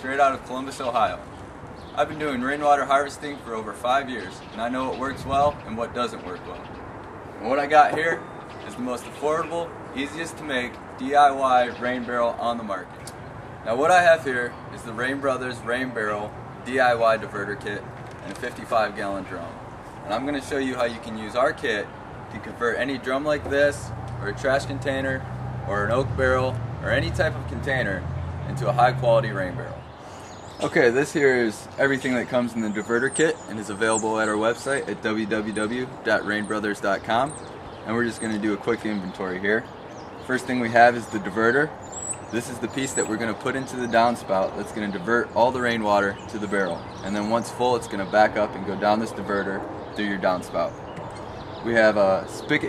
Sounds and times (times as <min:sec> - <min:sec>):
Speech: 0:00.0 - 0:01.3, 0:02.0 - 0:06.7, 0:07.4 - 0:13.0, 0:13.7 - 0:29.8, 0:30.6 - 0:50.8, 0:51.6 - 0:52.6.